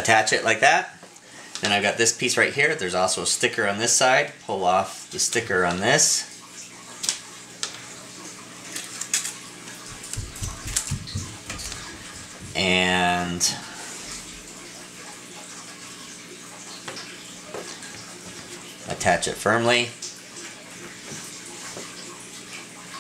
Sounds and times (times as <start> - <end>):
Speech: 0.0 - 1.0, 1.6 - 6.4, 12.6 - 13.7, 18.9 - 20.0.